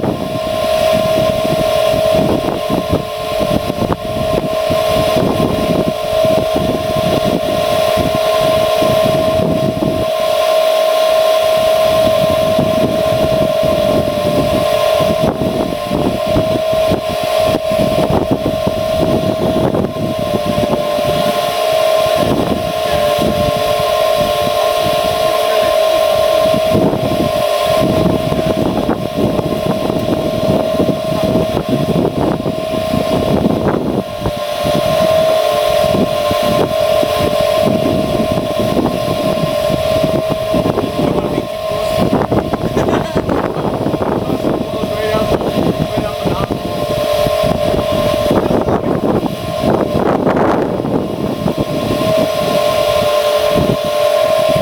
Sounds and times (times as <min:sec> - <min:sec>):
Vehicle: 0:19.9 - 0:54.6.